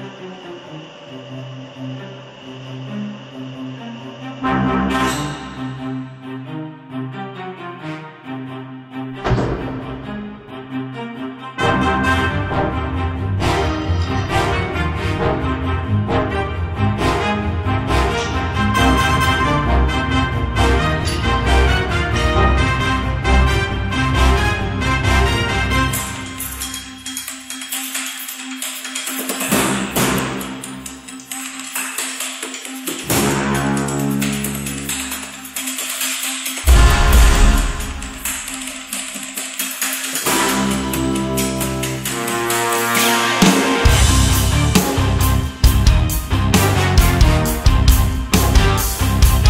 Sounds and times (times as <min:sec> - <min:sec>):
Background music: 0:00.0 - 0:49.5.